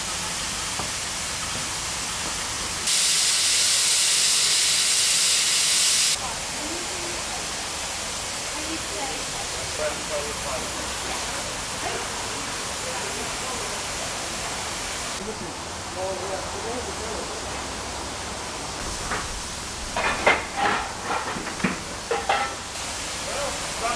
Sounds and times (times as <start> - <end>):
Speech: 6.2 - 7.7, 8.5 - 14.6, 15.2 - 17.7, 23.2 - 23.9.